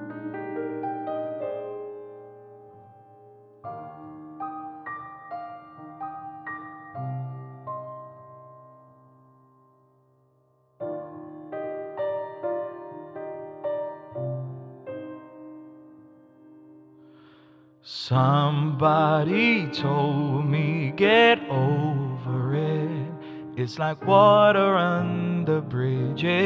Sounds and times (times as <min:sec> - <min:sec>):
Music: 0:00.0 - 0:26.4.